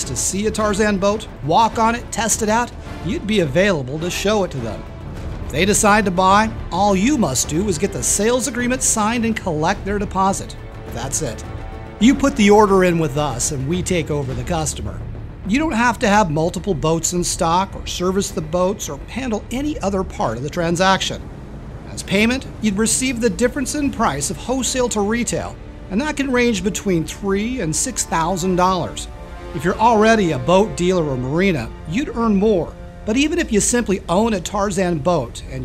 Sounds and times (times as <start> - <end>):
Speech: 0.0 - 4.9, 5.5 - 11.4, 12.0 - 21.2, 21.9 - 35.6.